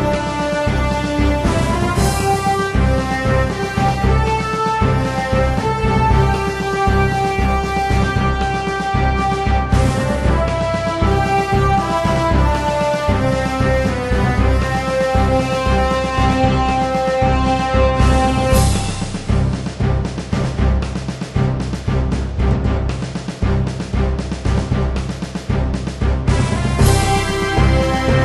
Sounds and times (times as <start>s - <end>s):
Music: 0.0s - 28.2s.